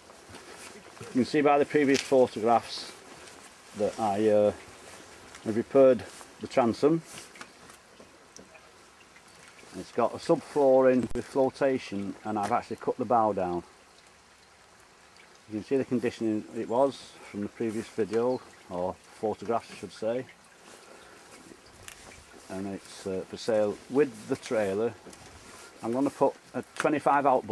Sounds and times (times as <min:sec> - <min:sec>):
Speech: 0:01.0 - 0:03.0, 0:03.8 - 0:04.6, 0:05.4 - 0:07.1, 0:09.7 - 0:13.7, 0:15.5 - 0:20.3, 0:22.5 - 0:25.0, 0:25.8 - 0:27.5.